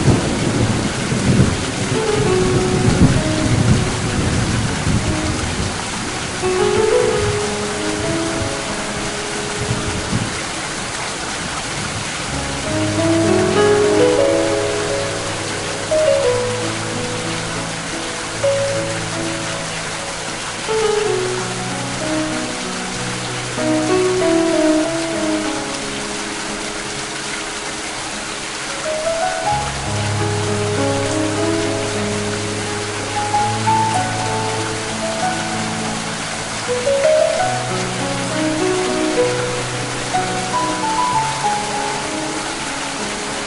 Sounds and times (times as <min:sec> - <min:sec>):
Music: 0:00.0 - 0:43.4
Rain on surface: 0:00.0 - 0:43.4.